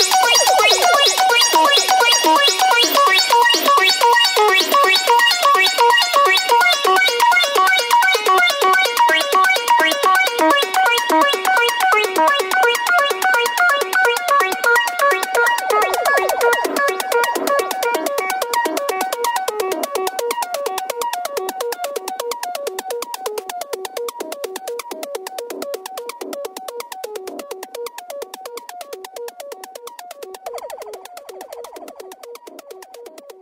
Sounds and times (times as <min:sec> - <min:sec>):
Ringtone: 0:00.0 - 0:07.4, 0:09.8 - 0:19.4, 0:30.4 - 0:33.1
Music: 0:00.0 - 0:33.4.